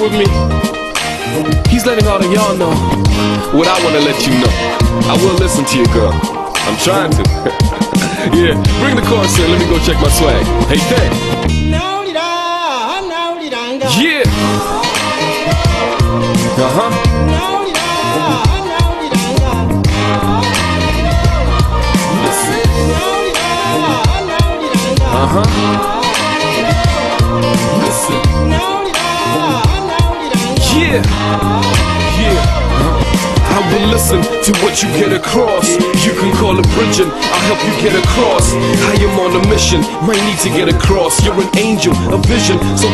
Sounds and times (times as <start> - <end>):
Speech: 0.0 - 0.4, 1.7 - 2.8, 3.5 - 7.3, 8.2 - 11.2, 16.6 - 17.0
Exciting music: 0.0 - 11.9, 13.9 - 42.9
Happy music: 0.0 - 42.9.